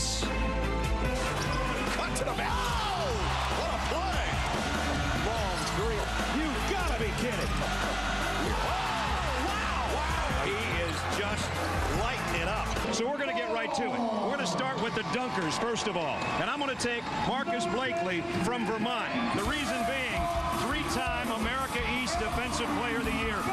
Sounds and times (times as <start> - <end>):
Music: 0.0 - 13.4, 17.6 - 23.5
Speech: 10.4 - 23.5.